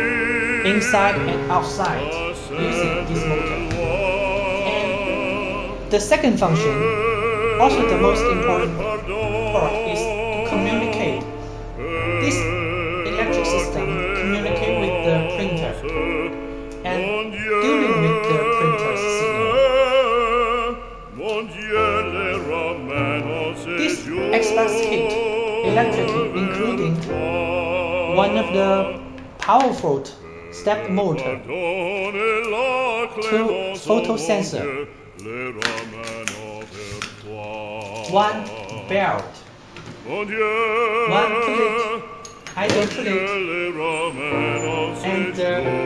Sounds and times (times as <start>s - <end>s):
Music: 0.0s - 45.8s
Speech: 0.7s - 2.0s, 2.6s - 3.7s, 5.9s - 6.8s, 7.6s - 8.8s, 9.5s - 11.2s, 13.1s - 15.8s, 25.7s - 27.0s, 28.2s - 28.8s, 29.4s - 31.4s, 33.2s - 34.7s, 38.1s - 39.4s, 41.1s - 41.7s, 42.6s - 43.2s.